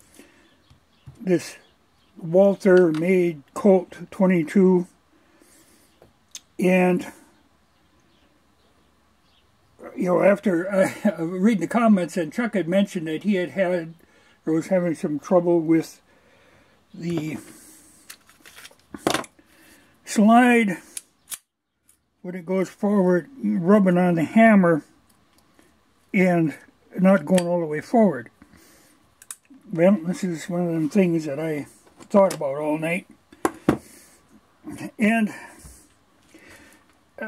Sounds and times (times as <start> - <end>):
Speech: 1.2 - 1.6, 2.2 - 5.0, 6.6 - 7.3, 9.8 - 16.0, 17.0 - 17.6, 20.1 - 20.8, 22.2 - 24.9, 26.1 - 28.3, 29.6 - 33.1, 34.7 - 35.7.